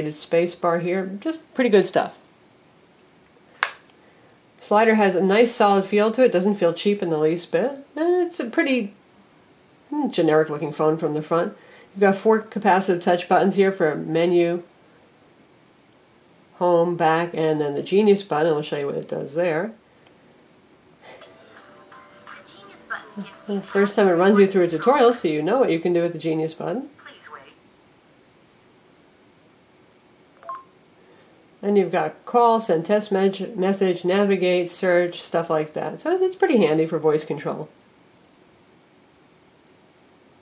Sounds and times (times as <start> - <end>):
Speech: 0.0 - 2.2, 4.6 - 9.0, 9.9 - 14.7, 16.6 - 19.8, 22.3 - 27.6, 31.6 - 37.8.